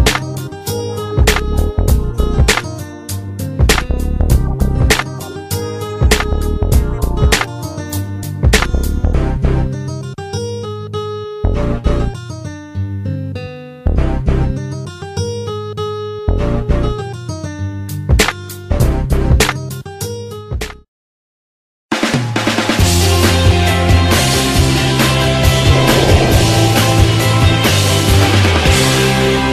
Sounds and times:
Music: 0.0 - 20.9, 21.9 - 29.5.

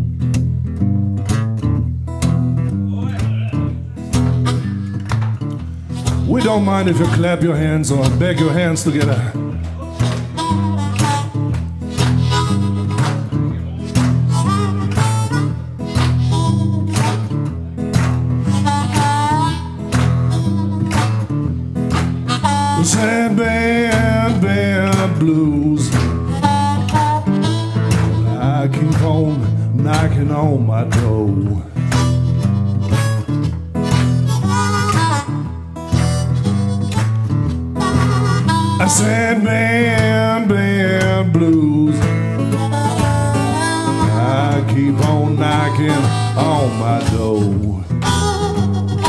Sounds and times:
Acoustic guitar: 0.0 - 49.0
Blues: 0.0 - 49.0.

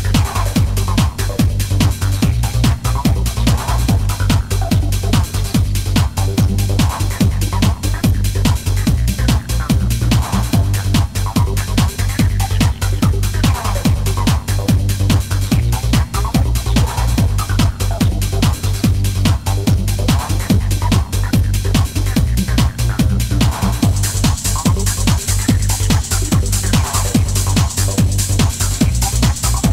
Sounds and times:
Trance music: 0.0 - 29.7.

